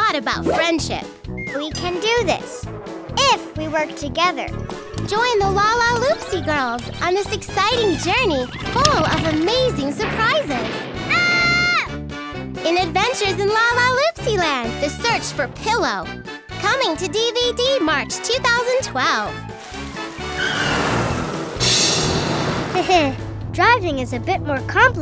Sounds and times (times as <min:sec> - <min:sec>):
Child speech, kid speaking: 0:00.0 - 0:11.9, 0:12.6 - 0:19.4, 0:22.8 - 0:25.0
Music for children: 0:01.1 - 0:09.0.